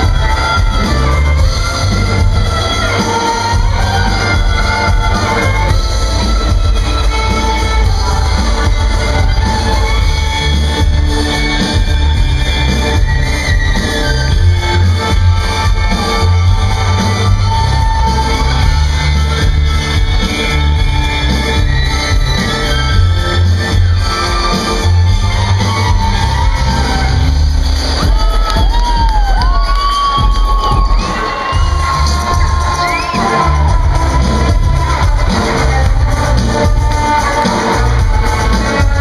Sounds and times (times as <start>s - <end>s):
Music: 0.0s - 39.0s.